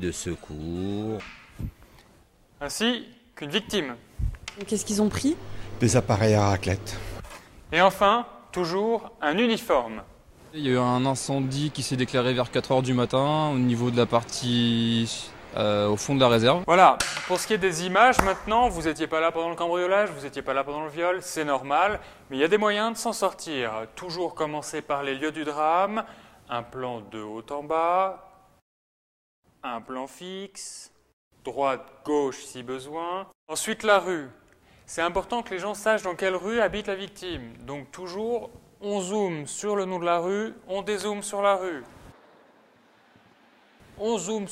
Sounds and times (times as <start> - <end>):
Speech: 0.0 - 1.2, 2.6 - 4.0, 4.6 - 7.0, 7.7 - 28.3, 29.6 - 41.9, 44.0 - 44.5.